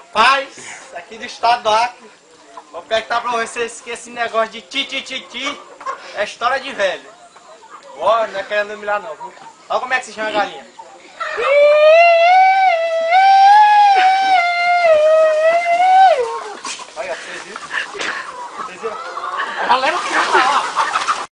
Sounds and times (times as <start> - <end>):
Cluck: 2.0 - 11.5, 16.2 - 21.3.